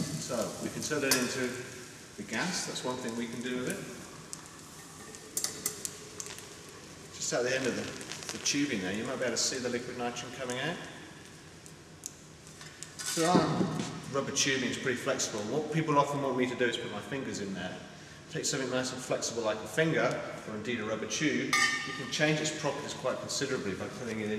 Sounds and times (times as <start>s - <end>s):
Speech: 0.0s - 1.6s, 2.2s - 4.0s, 7.2s - 10.9s, 13.1s - 24.3s.